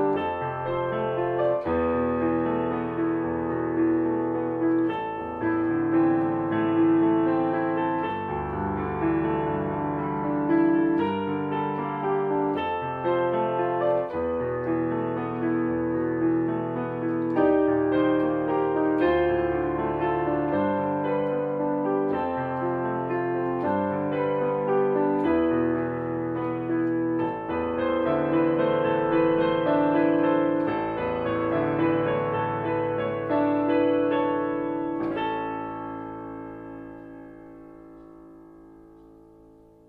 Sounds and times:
Piano: 0.0 - 39.8.

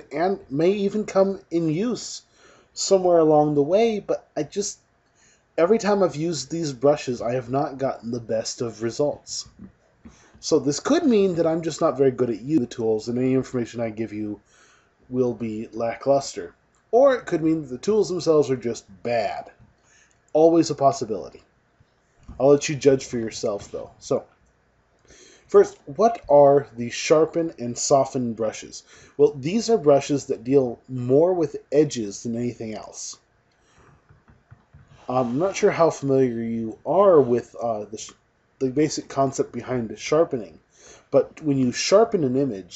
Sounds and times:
Speech: 0.0 - 4.8, 5.6 - 9.7, 10.4 - 14.4, 15.1 - 19.6, 20.4 - 21.4, 22.3 - 24.2, 25.5 - 33.2, 35.0 - 42.7.

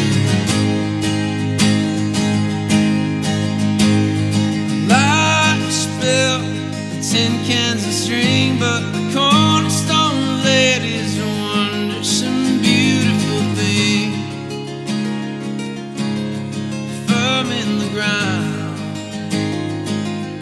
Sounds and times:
Acoustic guitar: 0.0 - 20.4
Strum: 0.0 - 20.4.

